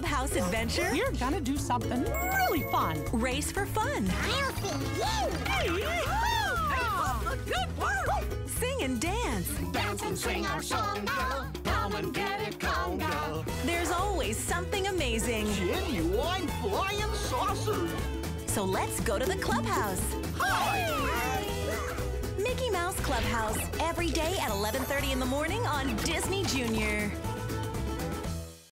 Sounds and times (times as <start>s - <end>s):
Speech: 0.0s - 10.8s, 13.7s - 21.5s, 22.4s - 27.2s
Music: 0.0s - 28.7s.